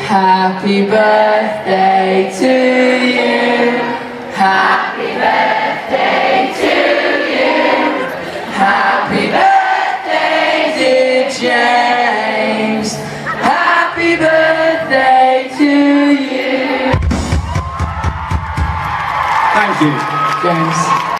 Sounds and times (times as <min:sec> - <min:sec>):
Music: 0:13.6 - 0:19.1.